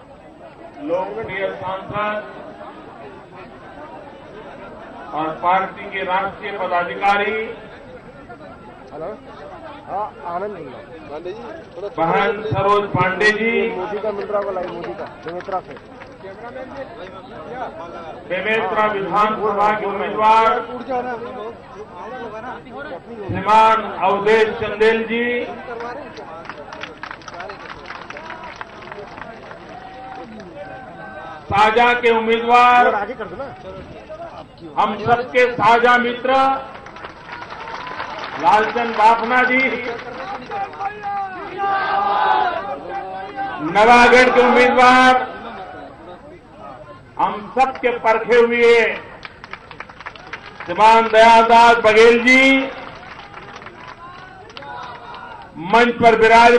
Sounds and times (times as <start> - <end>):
Conversation: 0.7 - 56.5
Male speech, man speaking: 0.8 - 2.3, 5.1 - 26.6, 30.2 - 36.7, 38.4 - 49.2, 50.7 - 52.8, 54.0 - 56.5.